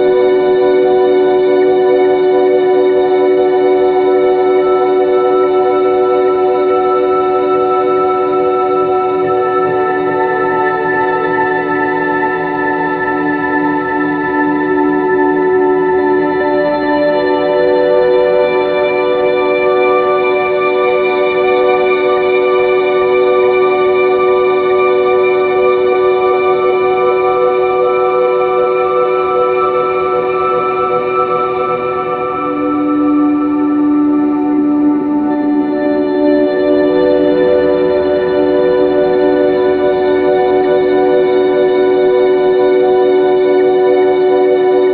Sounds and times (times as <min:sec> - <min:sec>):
Music: 0:00.0 - 0:44.9.